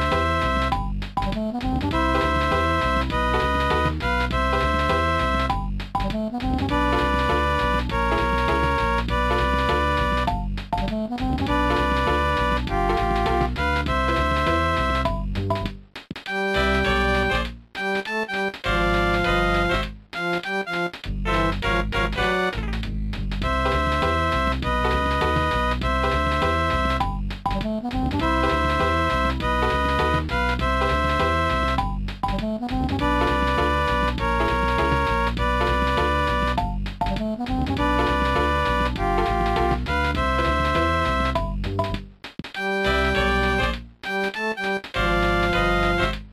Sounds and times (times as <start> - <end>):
Music: 0.0 - 46.3.